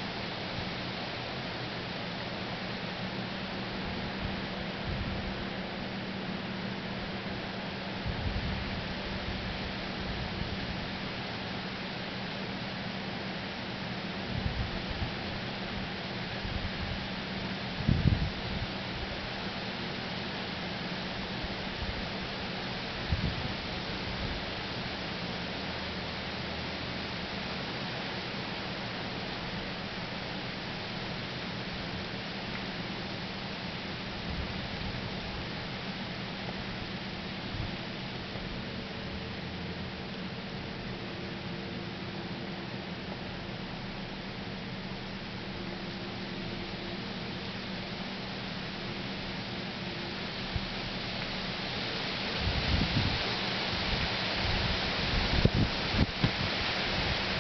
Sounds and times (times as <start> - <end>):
Rustling leaves: 0.0 - 57.4.